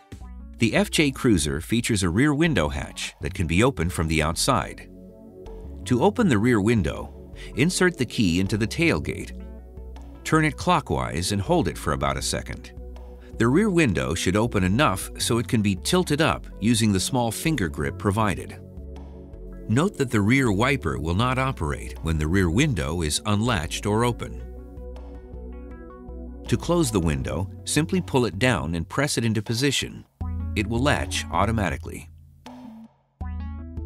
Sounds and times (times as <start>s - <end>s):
Music: 0.0s - 33.8s
Speech: 0.6s - 4.9s, 5.9s - 9.3s, 10.3s - 12.7s, 13.4s - 18.6s, 19.7s - 24.4s, 26.5s - 32.1s.